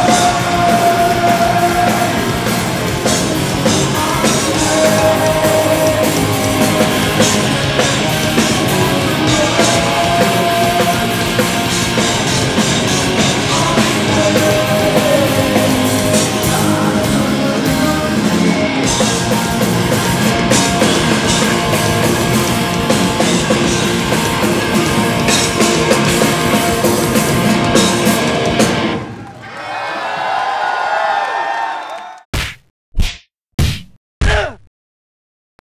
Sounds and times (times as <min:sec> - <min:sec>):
Music: 0:00.0 - 0:29.2.